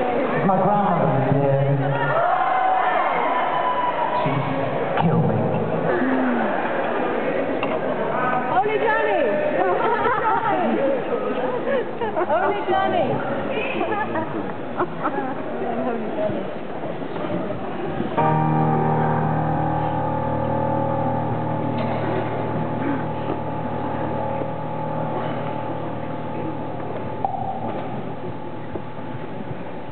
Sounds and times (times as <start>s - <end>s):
Music: 18.2s - 29.6s.